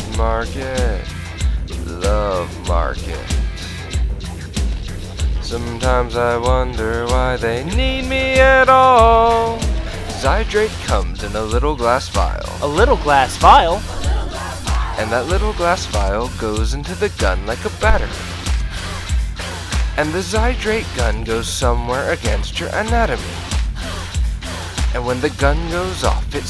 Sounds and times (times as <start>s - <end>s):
Happy music: 0.0s - 4.6s, 5.4s - 22.2s, 23.2s - 26.4s.